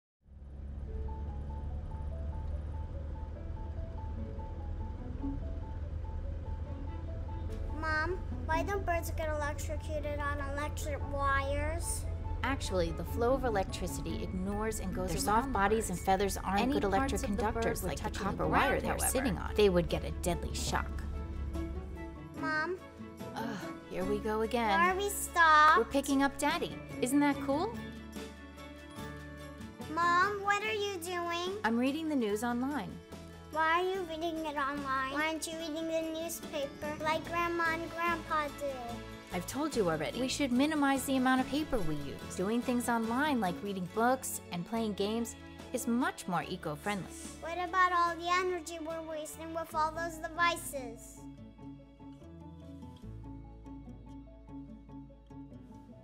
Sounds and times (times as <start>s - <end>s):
Music: 0.7s - 56.0s
Speech: 8.5s - 21.0s, 23.4s - 27.8s, 30.2s - 33.0s, 39.4s - 51.0s.